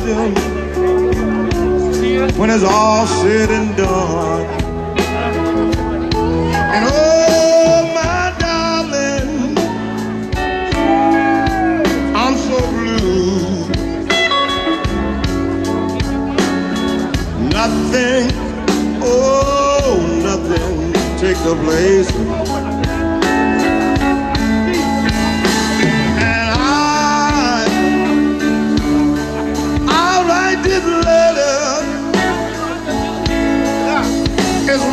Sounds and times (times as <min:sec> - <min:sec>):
Speech: 0:00.0 - 0:10.0, 0:14.8 - 0:23.7, 0:28.8 - 0:34.9
Blues: 0:00.0 - 0:34.9
Guitar: 0:00.0 - 0:34.9.